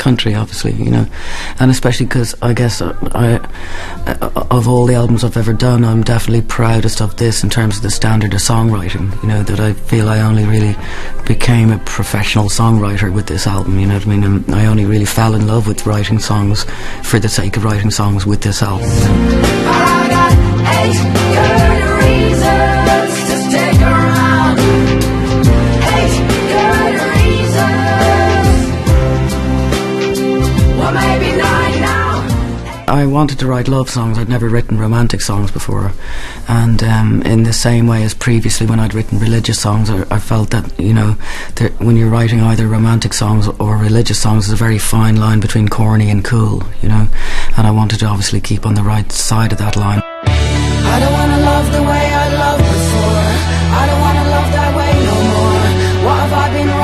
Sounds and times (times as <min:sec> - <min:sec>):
Speech: 0:00.0 - 0:19.2, 0:32.9 - 0:50.1
Happy music: 0:18.6 - 0:33.3, 0:49.5 - 0:56.8.